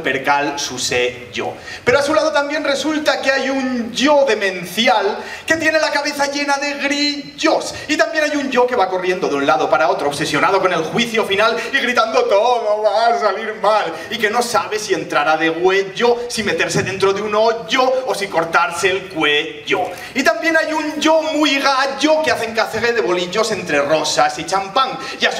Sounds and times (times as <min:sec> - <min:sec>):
Speech: 0:00.0 - 0:25.3.